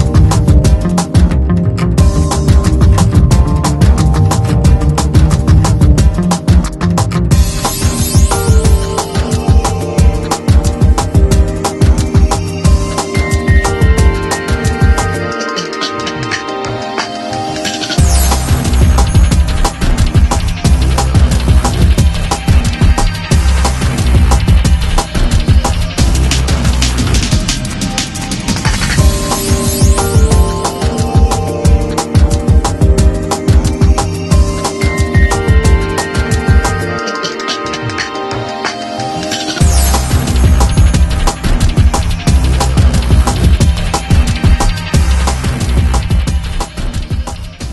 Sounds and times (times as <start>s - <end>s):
Music: 0.0s - 47.7s.